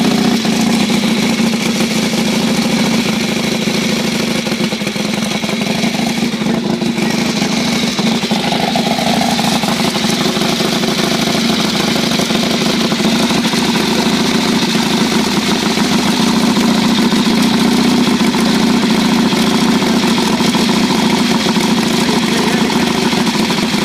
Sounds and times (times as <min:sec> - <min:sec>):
Idling: 0:00.0 - 0:23.8
Vehicle: 0:00.0 - 0:23.8.